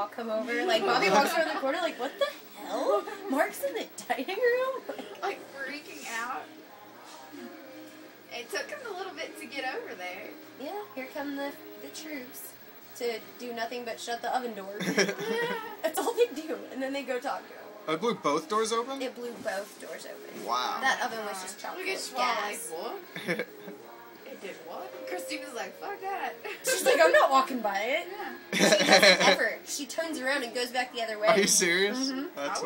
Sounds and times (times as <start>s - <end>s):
Music: 0.0s - 32.6s.